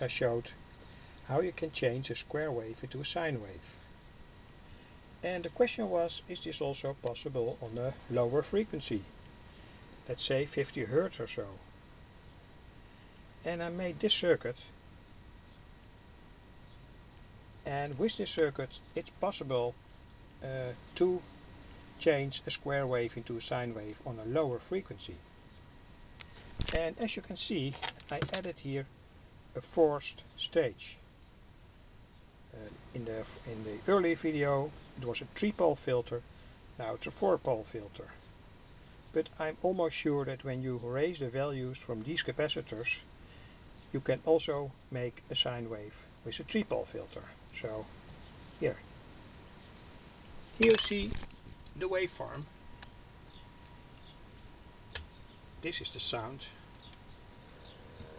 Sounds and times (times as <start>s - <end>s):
Speech: 0.0s - 0.6s, 1.3s - 3.8s, 5.2s - 9.1s, 10.1s - 11.6s, 13.4s - 14.8s, 17.6s - 19.8s, 20.4s - 21.3s, 22.0s - 25.2s, 26.7s - 28.9s, 29.6s - 31.0s, 32.5s - 36.2s, 36.8s - 38.2s, 39.1s - 43.1s, 43.9s - 47.9s, 48.6s - 48.9s, 50.6s - 51.2s, 51.8s - 52.5s, 55.6s - 56.6s.